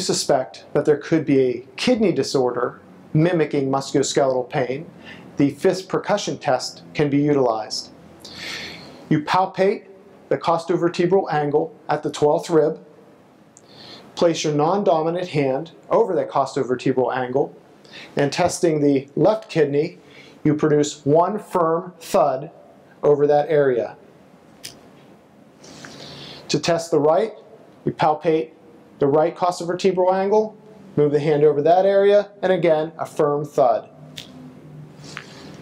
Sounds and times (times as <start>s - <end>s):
Speech: 0.0s - 8.0s, 9.1s - 12.9s, 14.2s - 17.6s, 18.2s - 24.0s, 26.5s - 33.9s.